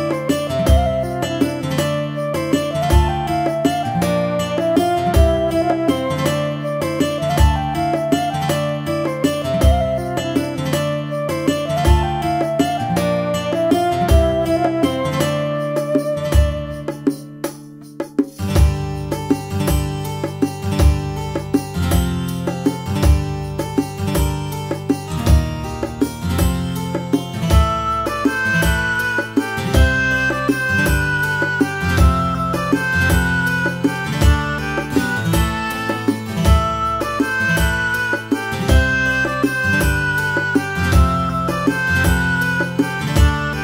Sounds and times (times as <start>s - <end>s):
Tender music: 0.0s - 43.6s.